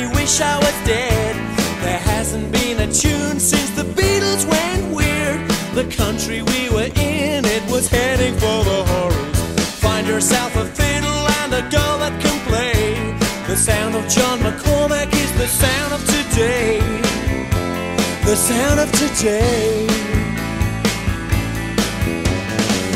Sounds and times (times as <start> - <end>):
Background music: 0.0 - 22.9.